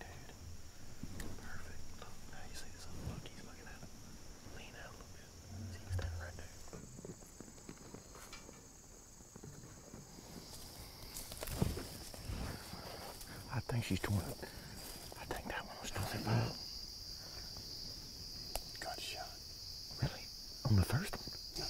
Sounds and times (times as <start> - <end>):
Outside, rural or natural: 0.0 - 21.6.